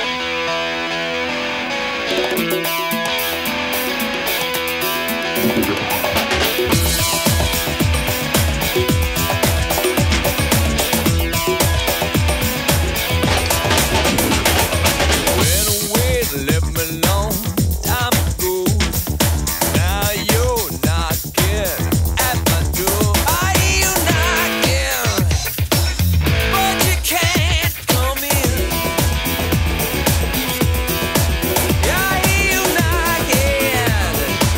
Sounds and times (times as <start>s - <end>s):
Disco: 2.1s - 34.5s
Singing: 15.4s - 25.9s, 26.5s - 28.9s, 31.8s - 34.5s.